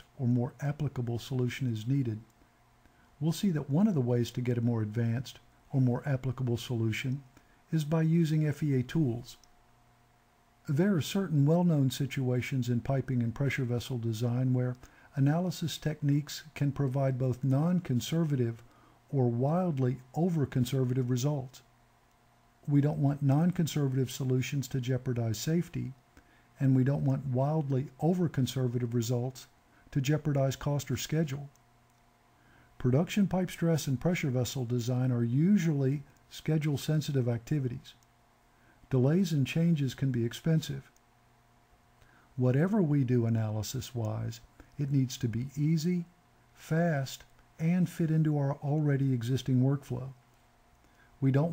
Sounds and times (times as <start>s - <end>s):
Speech: 0.0s - 2.3s, 3.2s - 9.4s, 10.7s - 21.7s, 22.7s - 26.0s, 26.6s - 31.6s, 32.8s - 38.0s, 38.9s - 40.9s, 42.4s - 50.2s, 51.2s - 51.5s.